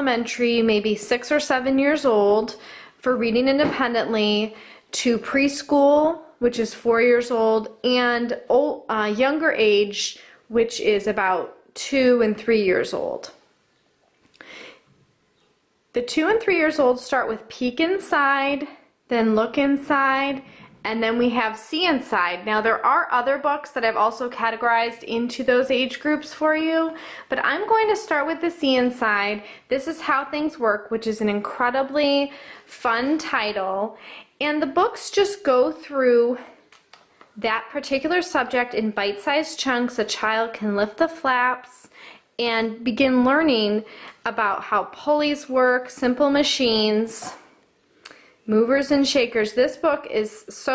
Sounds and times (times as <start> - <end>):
Speech: 0.0 - 13.4, 16.0 - 36.6, 37.4 - 47.5, 48.5 - 50.7.